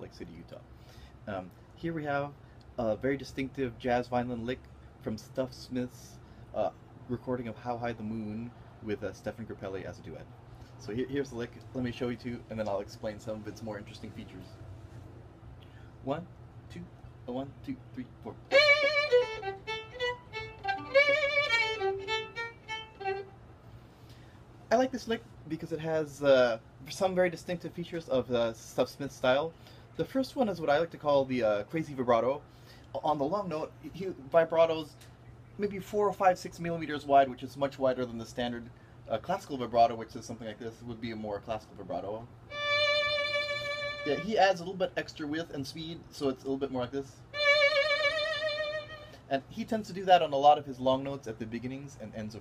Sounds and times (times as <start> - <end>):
Speech: 0.0 - 14.6, 16.0 - 18.5, 24.7 - 35.0, 35.6 - 42.3, 44.0 - 47.3, 49.3 - 52.4
Violin, fiddle: 18.4 - 23.4, 42.5 - 44.5, 47.3 - 49.3.